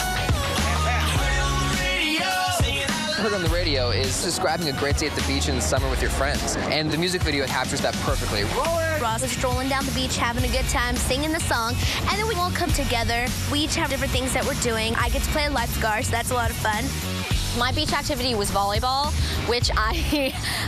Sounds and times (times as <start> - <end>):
Music: 0.0 - 20.6.